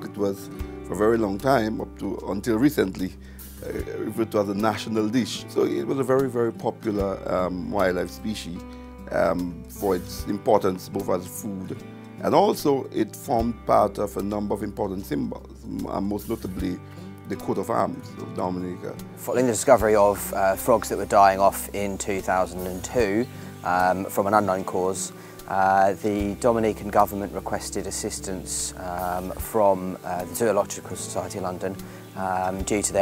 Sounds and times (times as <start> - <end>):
Music: 0.0 - 33.0
Speech: 0.0 - 33.0.